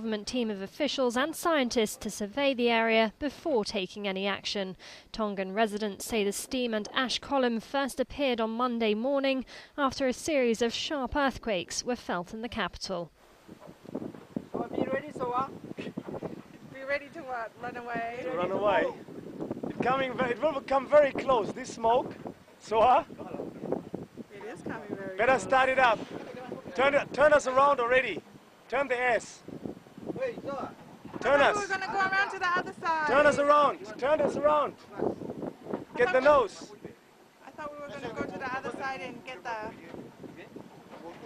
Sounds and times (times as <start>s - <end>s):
Speech: 0.0s - 13.1s.